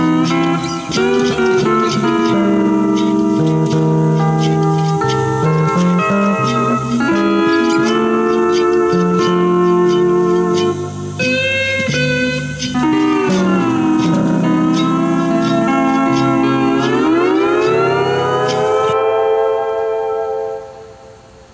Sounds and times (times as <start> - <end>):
Steel guitar, slide guitar: 0.0 - 21.0.